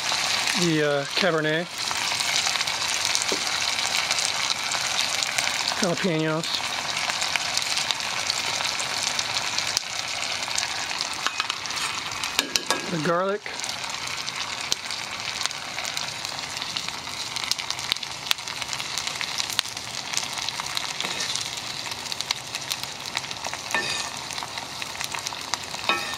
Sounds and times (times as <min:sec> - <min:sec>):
Frying (food): 0:00.0 - 0:26.1.